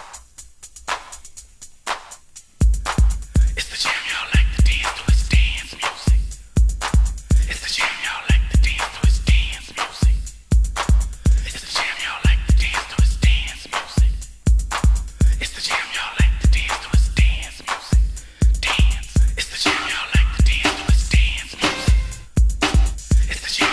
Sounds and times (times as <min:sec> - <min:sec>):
Music: 0:00.0 - 0:23.7.